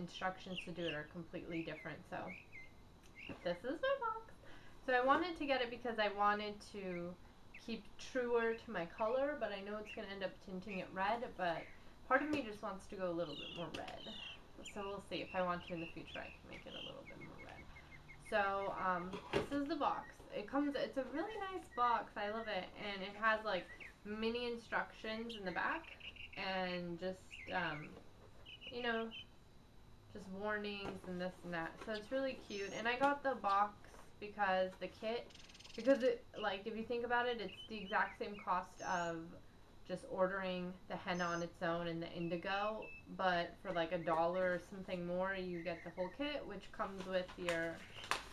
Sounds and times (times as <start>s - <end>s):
Bird vocalization, bird call, bird song: 0.0s - 3.6s, 6.5s - 11.9s, 12.8s - 18.8s, 23.6s - 24.1s, 25.2s - 26.4s, 27.2s - 29.3s, 31.9s - 33.6s, 35.2s - 36.7s, 37.3s - 39.3s, 41.0s - 46.6s, 47.2s - 48.3s.